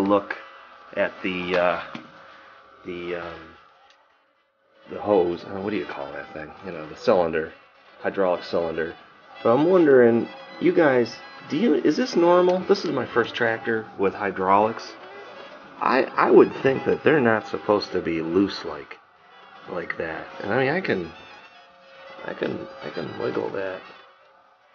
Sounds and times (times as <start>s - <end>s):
Speech: 0.0s - 0.4s, 1.0s - 1.9s, 2.9s - 3.6s, 4.9s - 15.0s, 15.8s - 19.0s, 19.7s - 21.2s, 22.2s - 23.9s.